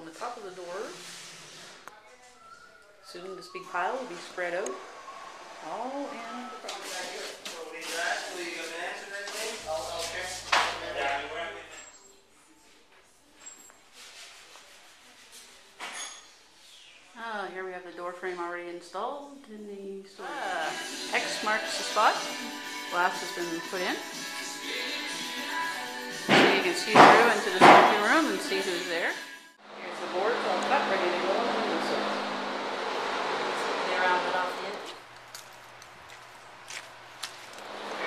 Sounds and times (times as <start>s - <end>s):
Music: 20.2s - 29.6s
Speech: 26.4s - 29.1s, 29.8s - 32.2s, 33.8s - 35.0s.